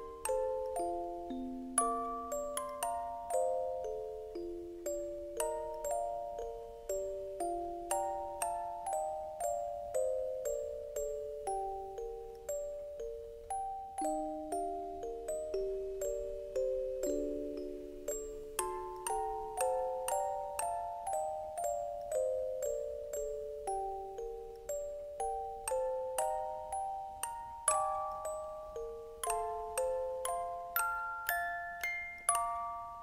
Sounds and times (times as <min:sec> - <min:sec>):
Music: 0:00.0 - 0:33.0.